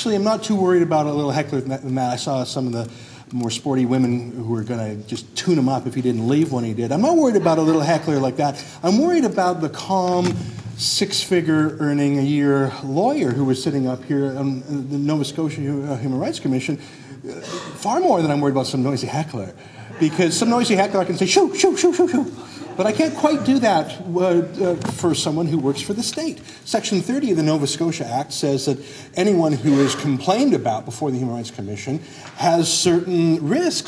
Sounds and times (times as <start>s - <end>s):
Male speech, man speaking: 0.0s - 33.8s.